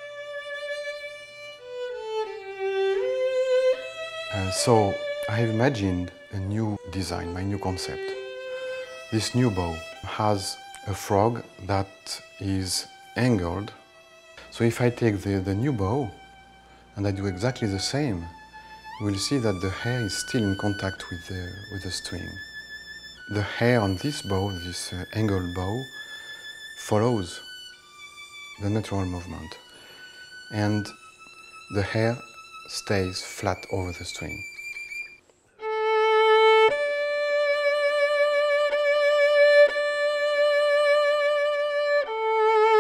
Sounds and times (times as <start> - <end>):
Music: 0.0 - 42.8
Speech: 4.3 - 8.2, 9.1 - 13.8, 14.5 - 16.2, 17.0 - 18.4, 19.0 - 22.4, 23.3 - 25.9, 26.8 - 27.4, 28.6 - 29.6, 30.5 - 31.0, 31.7 - 34.4.